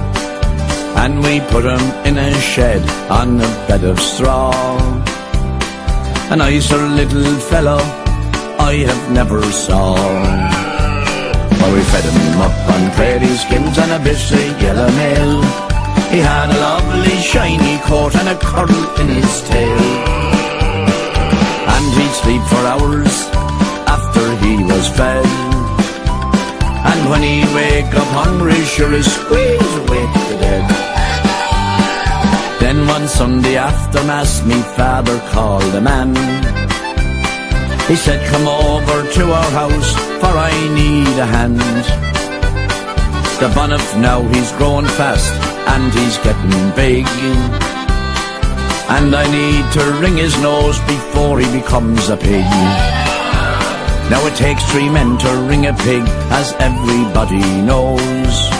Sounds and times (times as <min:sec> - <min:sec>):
Music: 0:00.0 - 0:58.5.